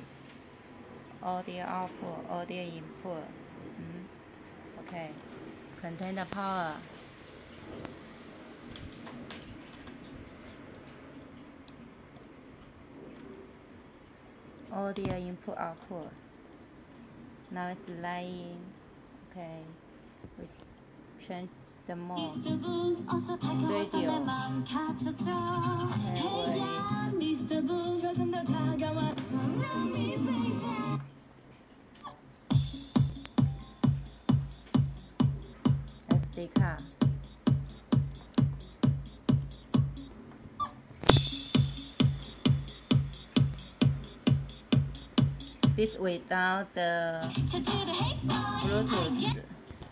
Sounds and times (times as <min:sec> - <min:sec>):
Speech: 0:01.2 - 0:04.1, 0:04.8 - 0:05.2, 0:05.8 - 0:06.8, 0:14.7 - 0:16.2, 0:17.5 - 0:19.8, 0:21.2 - 0:22.4, 0:23.6 - 0:24.4, 0:36.1 - 0:36.9, 0:45.8 - 0:47.3, 0:48.6 - 0:49.5
Music: 0:22.2 - 0:31.1, 0:32.5 - 0:40.2, 0:41.1 - 0:46.0, 0:47.2 - 0:49.4.